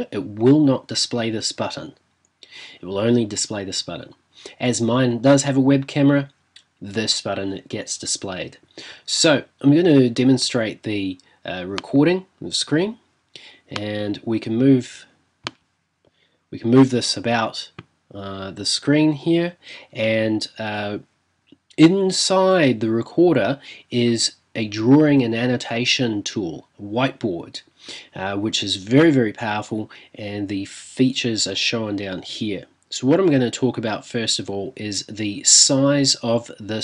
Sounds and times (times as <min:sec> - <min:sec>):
Speech: 0:00.0 - 0:13.0, 0:13.7 - 0:15.2, 0:16.6 - 0:21.1, 0:21.7 - 0:36.8.